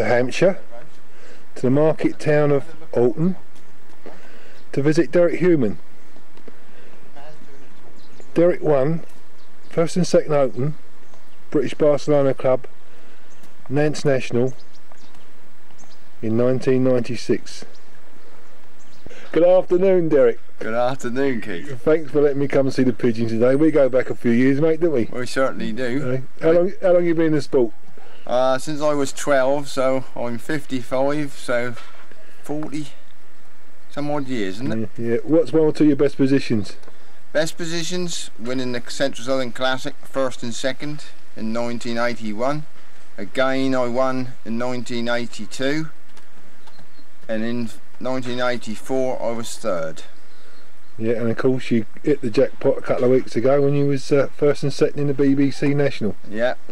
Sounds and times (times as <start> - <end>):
Speech: 0.0 - 0.9, 1.6 - 3.4, 4.7 - 5.8, 8.4 - 9.0, 9.7 - 10.8, 11.5 - 12.7, 13.7 - 14.6, 16.2 - 17.7, 19.3 - 27.7, 28.3 - 31.8, 32.4 - 33.0, 33.9 - 36.8, 37.4 - 46.0, 47.3 - 50.1, 51.0 - 56.7
Bird: 0.0 - 56.7.